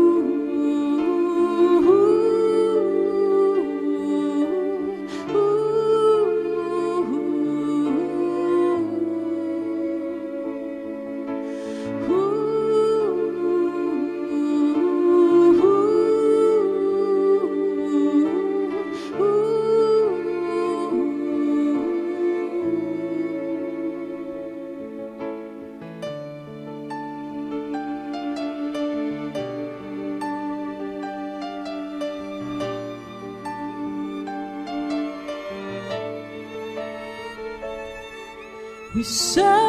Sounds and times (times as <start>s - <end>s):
Sad music: 0.0s - 39.6s.